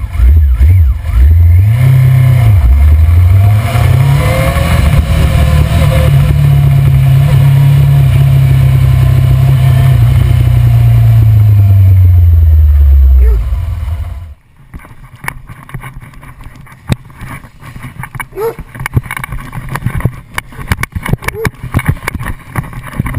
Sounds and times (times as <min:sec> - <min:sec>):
Motorcycle: 0:00.0 - 0:23.1.